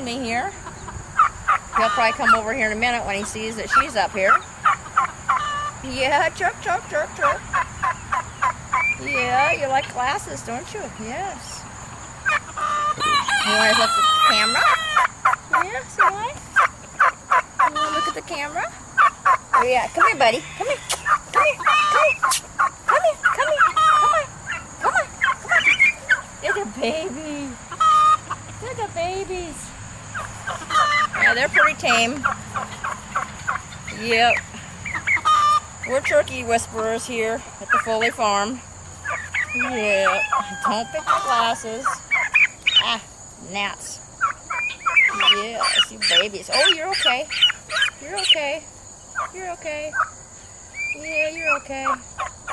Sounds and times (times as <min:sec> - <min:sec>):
Crowing, cock-a-doodle-doo: 0:13.0 - 0:15.0, 0:39.7 - 0:41.6.